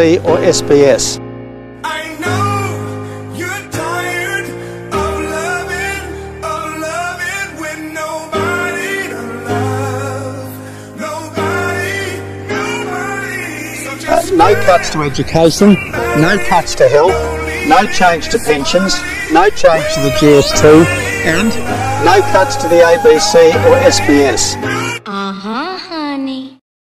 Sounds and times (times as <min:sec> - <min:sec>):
Speech: 0:00.0 - 0:01.2, 0:14.1 - 0:26.6
Music: 0:00.0 - 0:26.6.